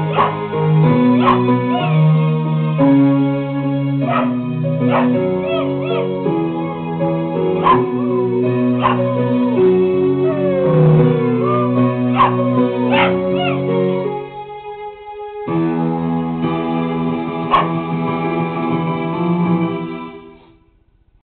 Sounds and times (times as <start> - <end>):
Music: 0.0 - 21.2
Bow-wow: 0.1 - 0.4, 1.2 - 2.0, 4.1 - 6.1, 7.6 - 7.9, 8.8 - 9.1, 11.4 - 13.6, 17.5 - 17.8.